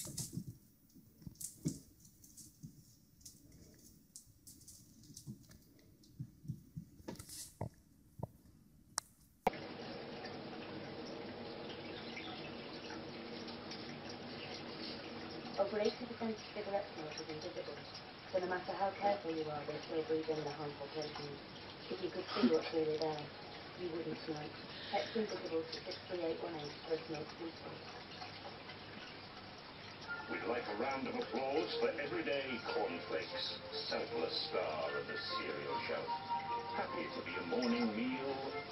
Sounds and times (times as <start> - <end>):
Speech: 15.6 - 17.8, 18.4 - 27.8, 30.3 - 36.1, 36.8 - 38.7.